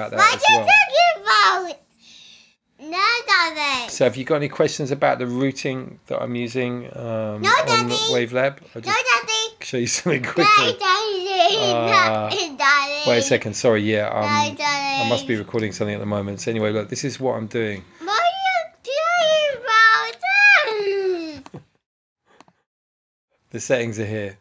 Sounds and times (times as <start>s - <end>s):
Speech: 0.0s - 1.5s, 4.0s - 9.0s, 13.0s - 17.8s, 23.6s - 24.4s.